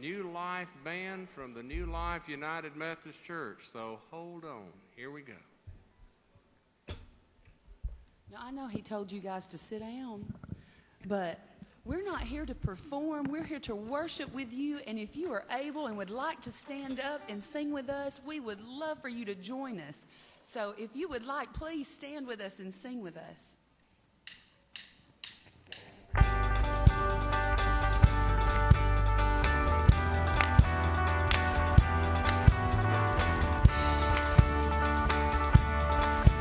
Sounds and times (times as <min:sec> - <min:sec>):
Speech: 0:00.0 - 0:05.5, 0:11.1 - 0:23.6
Music: 0:16.6 - 0:18.5, 0:25.3 - 0:36.4.